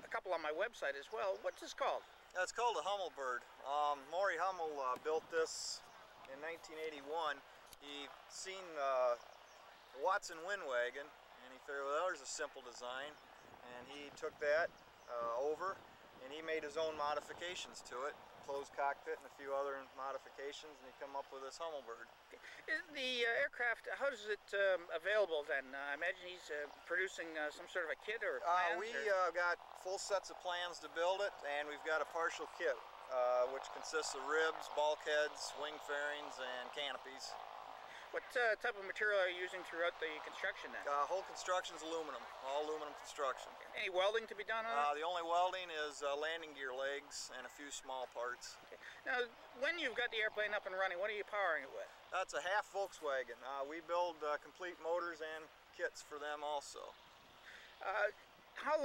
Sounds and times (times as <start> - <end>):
Speech: 0.0 - 9.2, 10.0 - 37.4, 38.0 - 57.0, 57.8 - 58.8.